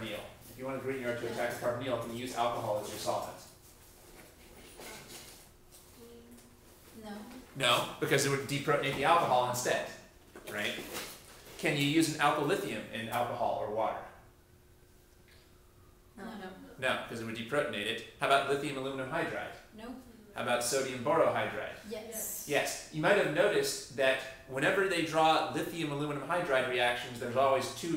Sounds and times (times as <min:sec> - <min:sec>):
Inside, small room: 0:00.0 - 0:27.9.